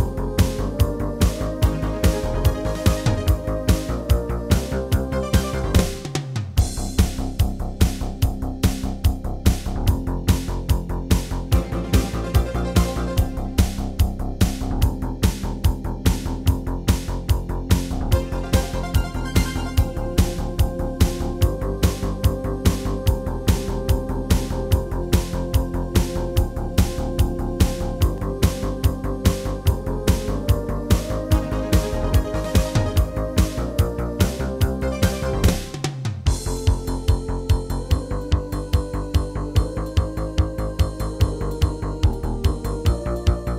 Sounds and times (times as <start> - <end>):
Music: 0.0 - 43.5.